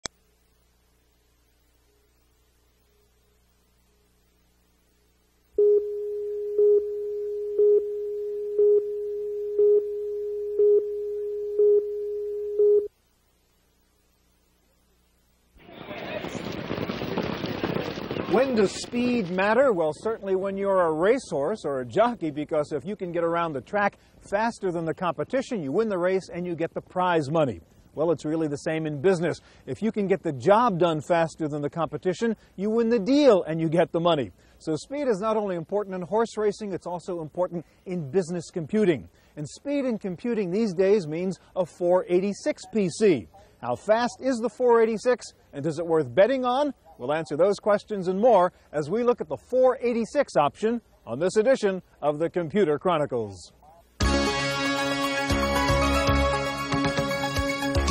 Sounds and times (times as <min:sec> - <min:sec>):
Silence: 0:00.0 - 0:16.1.